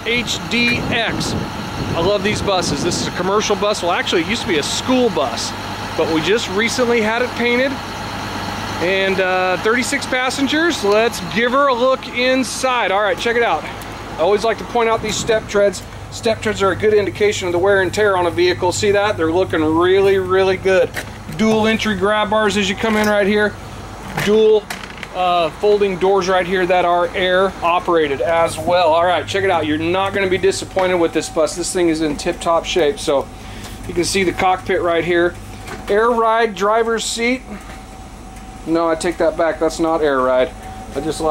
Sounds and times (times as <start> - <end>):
Speech: 0.0 - 7.9, 8.8 - 37.6, 38.6 - 41.3
Vehicle: 0.0 - 41.3.